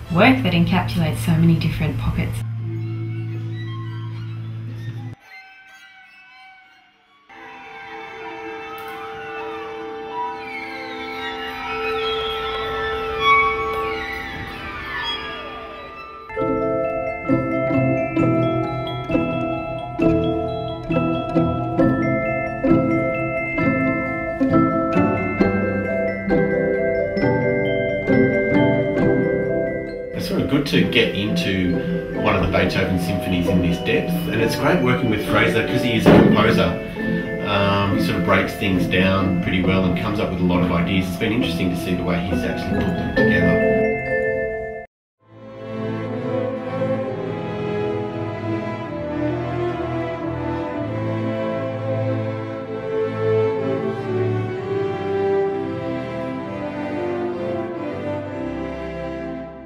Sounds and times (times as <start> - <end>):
Orchestra: 1.6 - 6.4, 7.2 - 59.6
Violin, fiddle: 2.7 - 16.3.